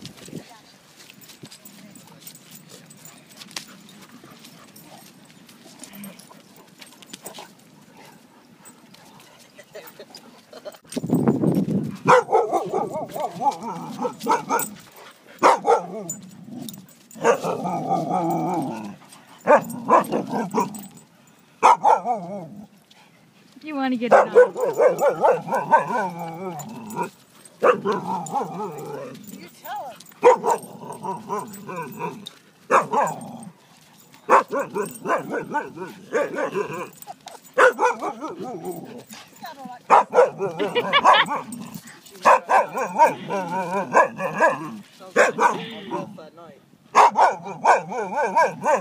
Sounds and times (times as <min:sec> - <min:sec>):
Outside, rural or natural: 0:00.0 - 0:48.8
Bark: 0:12.1 - 0:14.8, 0:15.4 - 0:16.0, 0:17.2 - 0:17.6, 0:19.5 - 0:20.7, 0:21.6 - 0:22.3, 0:24.1 - 0:26.1, 0:27.6 - 0:28.5, 0:30.2 - 0:30.7, 0:32.7 - 0:33.2, 0:34.3 - 0:36.6, 0:37.6 - 0:38.7, 0:39.9 - 0:41.5, 0:42.2 - 0:46.1, 0:46.9 - 0:48.8
Bow-wow: 0:12.1 - 0:14.8, 0:15.4 - 0:16.2, 0:17.2 - 0:18.4, 0:19.4 - 0:20.8, 0:21.6 - 0:22.5, 0:24.1 - 0:29.2, 0:30.2 - 0:32.1, 0:32.7 - 0:33.5, 0:34.3 - 0:37.0, 0:37.6 - 0:39.0, 0:39.9 - 0:46.1, 0:46.9 - 0:48.8.